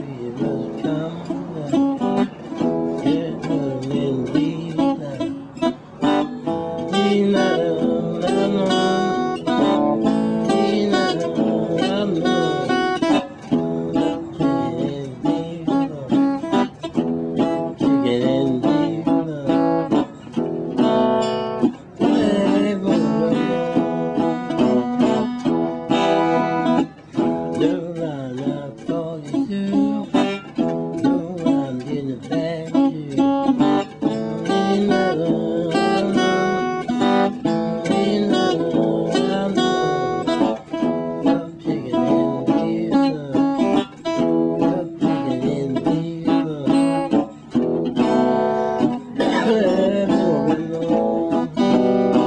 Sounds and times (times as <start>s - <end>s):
Music: 0.0s - 52.2s.